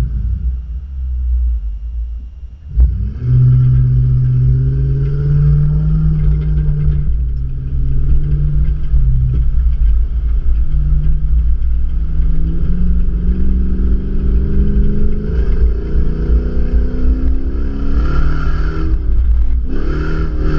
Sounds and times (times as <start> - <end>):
Clatter: 0.0 - 20.5.